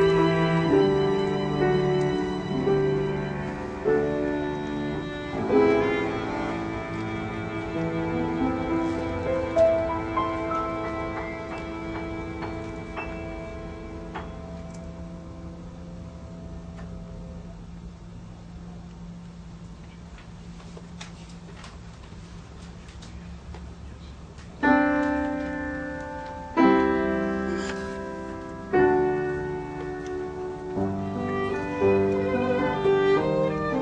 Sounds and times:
Violin, fiddle: 0.0s - 14.1s, 29.1s - 33.8s
Cello: 0.0s - 15.0s, 26.6s - 33.8s
Orchestra: 0.0s - 15.0s, 24.7s - 33.8s
Piano: 0.0s - 21.1s, 24.5s - 33.8s.

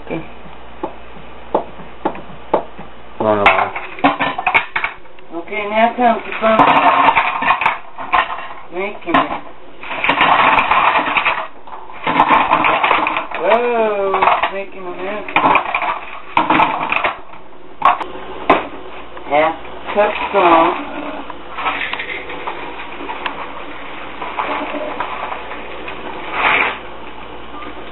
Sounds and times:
Speech: 5.3s - 6.8s, 8.7s - 9.4s, 13.4s - 15.4s, 19.3s - 21.1s.

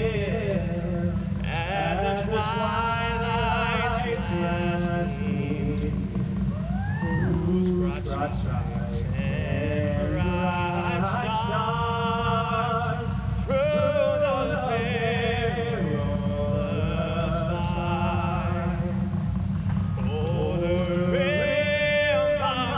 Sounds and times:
Male singing: 0.0s - 6.1s, 7.0s - 19.1s, 20.0s - 22.7s.

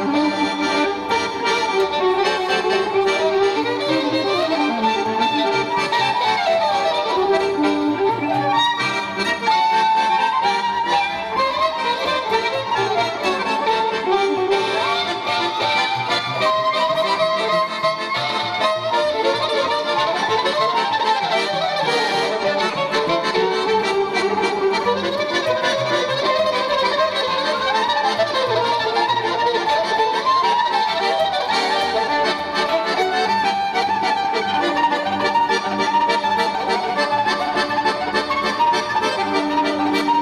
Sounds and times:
Violin, fiddle: 0.0s - 40.2s.

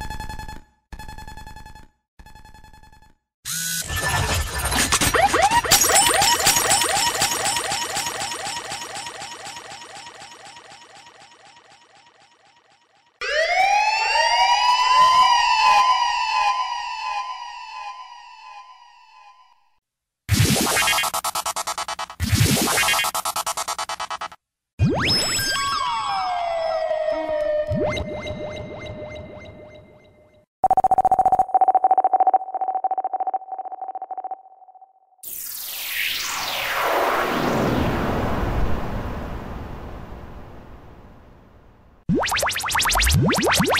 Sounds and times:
Sound effect: 3.0s - 19.7s, 20.3s - 41.4s, 42.1s - 43.8s
Dial tone: 30.6s - 35.0s.

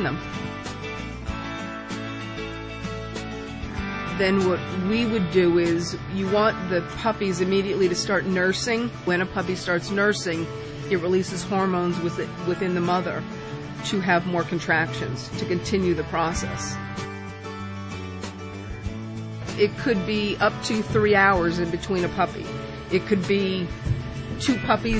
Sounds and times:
Speech: 0.0s - 0.2s, 4.1s - 13.2s, 13.8s - 16.8s, 19.6s - 23.7s, 24.4s - 24.9s
Music: 0.0s - 24.9s.

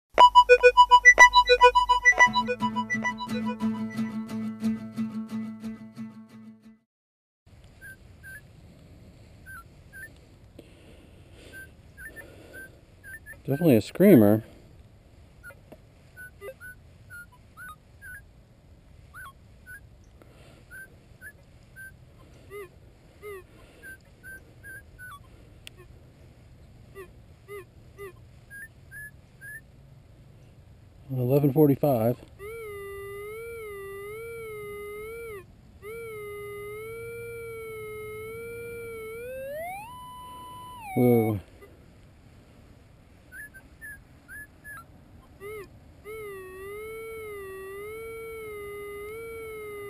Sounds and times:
Music: 0.2s - 6.8s.

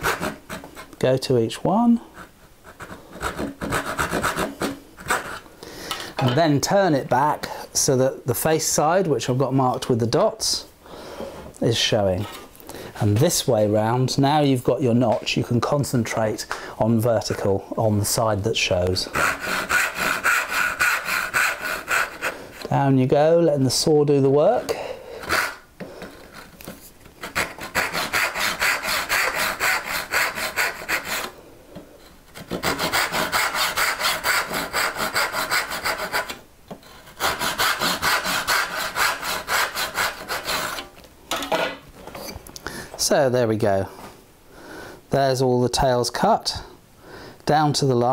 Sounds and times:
Sawing: 0.0s - 1.0s, 2.2s - 5.4s, 19.1s - 22.6s, 24.5s - 25.6s, 27.2s - 31.4s, 32.4s - 40.9s
Rub: 2.1s - 5.4s, 19.1s - 22.4s, 26.2s - 31.3s, 32.4s - 40.8s.

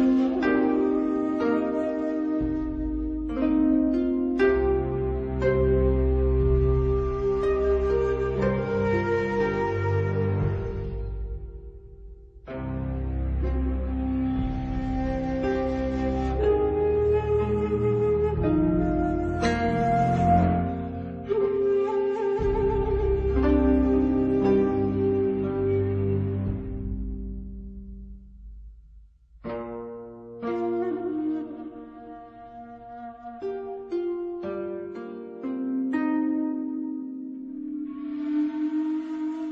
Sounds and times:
Sad music: 0.0s - 28.8s, 29.4s - 39.5s.

